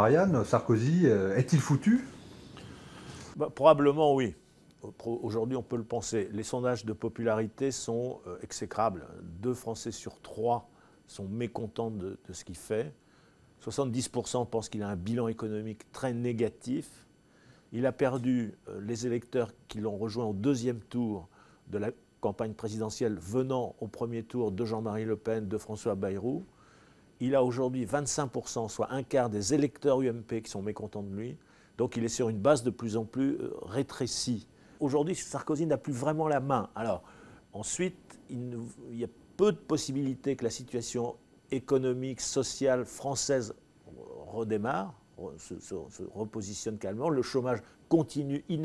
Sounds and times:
Speech: 0.0 - 2.2, 3.4 - 13.0, 13.6 - 17.1, 17.8 - 26.5, 27.2 - 48.6.

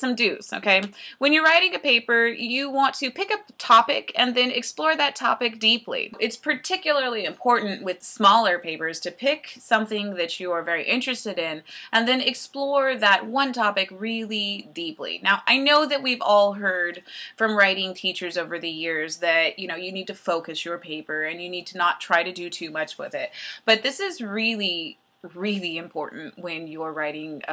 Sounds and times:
Speech: 0.0 - 27.5.

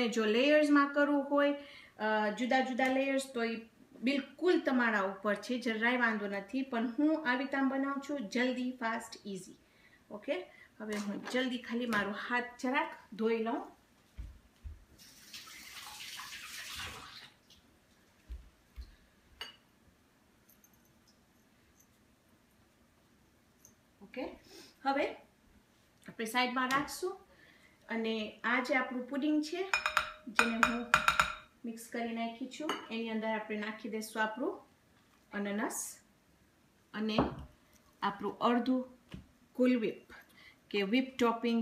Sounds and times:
Speech: 0.0 - 13.8, 24.0 - 25.2, 26.1 - 27.3, 27.9 - 29.7, 31.6 - 34.7, 35.3 - 36.1, 38.0 - 39.0, 39.6 - 40.1, 40.7 - 41.6
Inside, small room: 0.0 - 41.6.

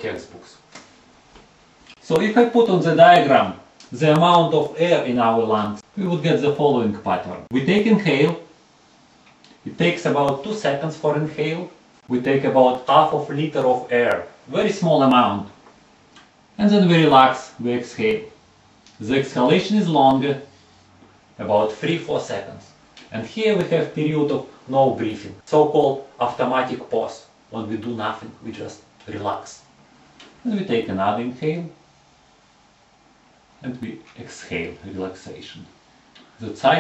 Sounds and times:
Speech: 0.0 - 0.6, 2.0 - 8.5, 9.6 - 15.6, 16.6 - 18.4, 19.0 - 20.5, 21.4 - 29.7, 30.4 - 31.8, 33.6 - 35.8, 36.4 - 36.8.

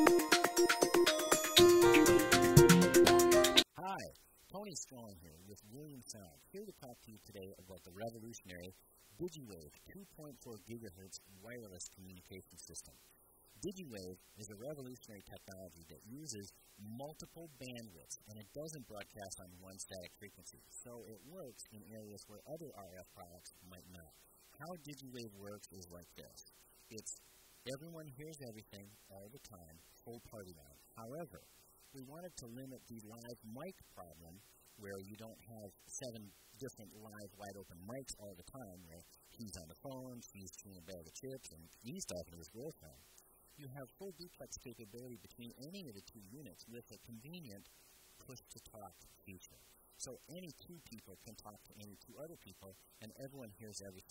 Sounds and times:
Speech: 3.7 - 13.0, 13.6 - 43.0, 43.6 - 54.1.

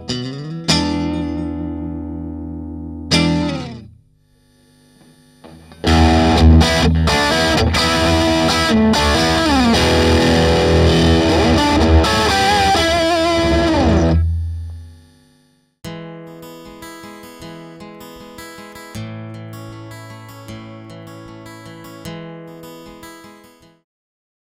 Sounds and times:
Acoustic guitar: 0.0 - 4.0, 15.9 - 23.8
Electric guitar: 0.0 - 4.0, 5.5 - 14.3.

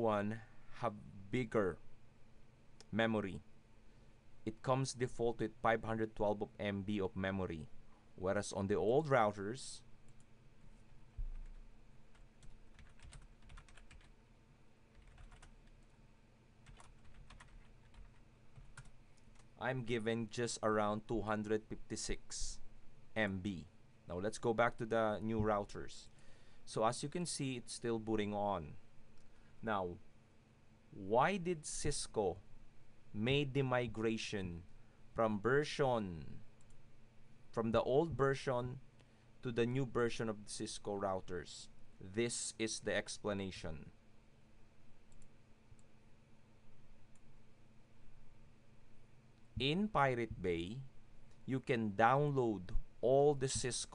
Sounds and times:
Typing: 11.3 - 14.1, 14.9 - 15.9, 16.6 - 19.5.

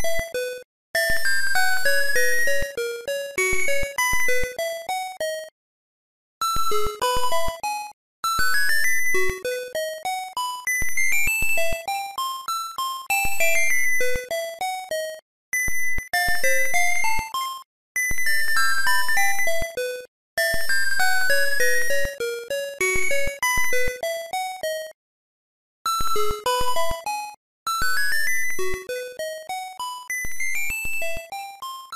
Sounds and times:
Music: 0.0 - 5.5, 6.4 - 25.0, 25.9 - 31.9.

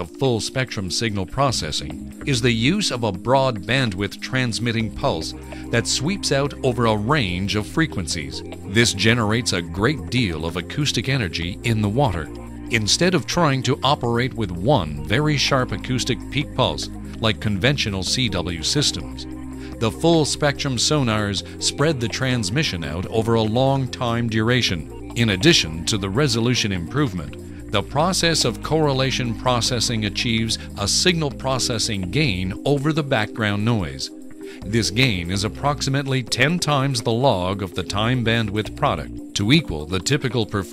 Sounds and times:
Speech: 0.0 - 19.2, 19.8 - 40.7
Music: 0.0 - 40.7.

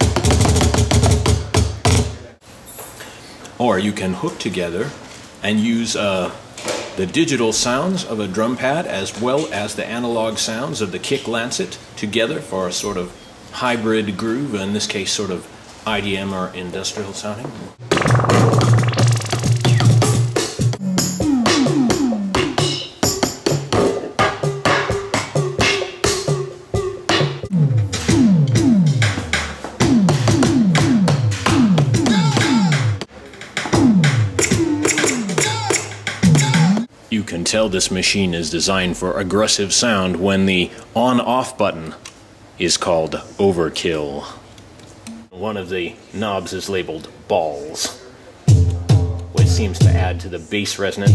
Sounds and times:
Drum machine: 0.0 - 2.2, 17.8 - 36.9, 48.5 - 50.2
Speech: 3.6 - 6.4, 7.0 - 17.8, 36.5 - 42.0, 42.6 - 44.4, 45.3 - 48.2, 49.3 - 51.1
Synthesizer: 17.8 - 20.2.

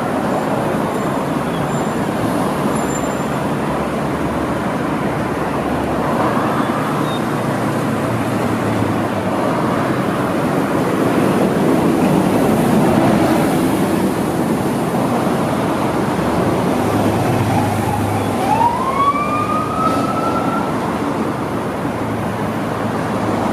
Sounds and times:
Ambulance (siren): 17.1 - 21.4.

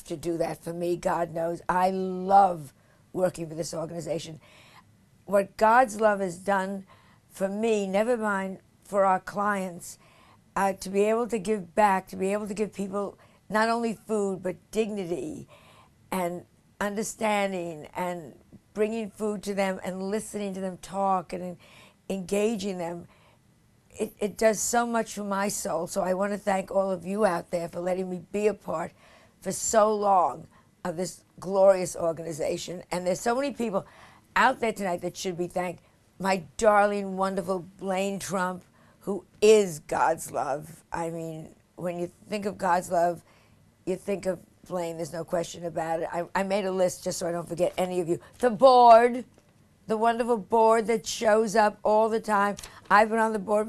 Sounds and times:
Female speech, woman speaking: 0.0 - 4.4, 5.3 - 6.8, 7.4 - 10.0, 10.6 - 15.5, 16.2 - 23.1, 24.0 - 33.8, 34.4 - 43.2, 43.9 - 49.3, 49.9 - 53.6
Narration, monologue: 0.0 - 53.6.

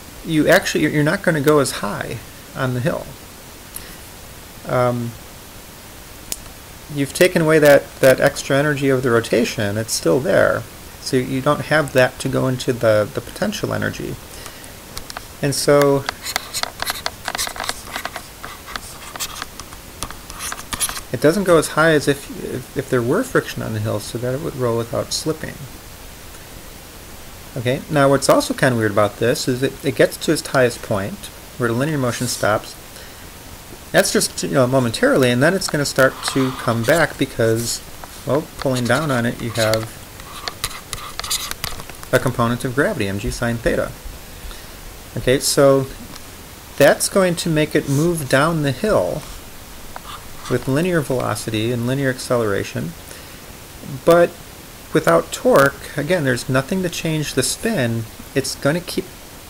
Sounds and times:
Inside, small room: 0.0 - 59.5
Speech: 0.2 - 3.2, 4.6 - 5.2, 6.9 - 14.2, 15.4 - 16.1, 21.2 - 25.7, 27.6 - 32.8, 33.9 - 40.0, 42.1 - 44.0, 45.2 - 46.1, 46.8 - 49.3, 50.5 - 53.0, 53.8 - 59.1.

